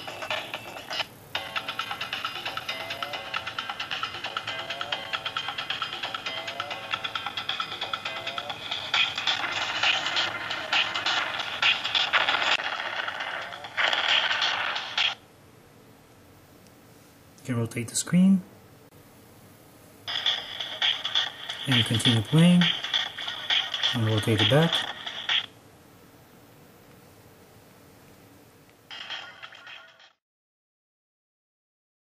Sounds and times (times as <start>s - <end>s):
Music: 0.0s - 12.6s, 20.1s - 25.5s
Inside, small room: 0.0s - 30.2s
Speech: 17.4s - 18.5s, 21.7s - 22.8s, 23.9s - 24.9s.